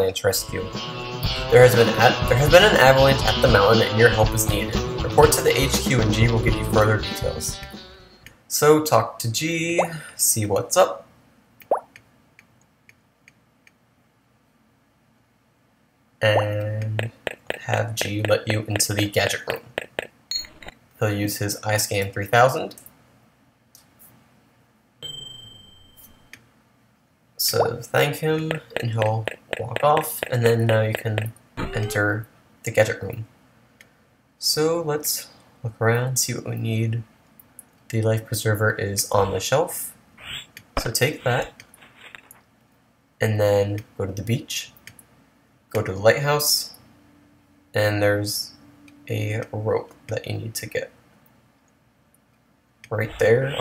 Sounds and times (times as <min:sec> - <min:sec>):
Speech: 0:00.0 - 0:00.7, 0:01.5 - 0:07.6, 0:08.5 - 0:11.1, 0:16.2 - 0:19.7, 0:21.0 - 0:22.8, 0:27.4 - 0:33.3, 0:34.4 - 0:37.1, 0:37.9 - 0:40.0, 0:40.8 - 0:41.6, 0:43.2 - 0:44.8, 0:45.7 - 0:46.8, 0:47.7 - 0:51.0, 0:52.9 - 0:53.6.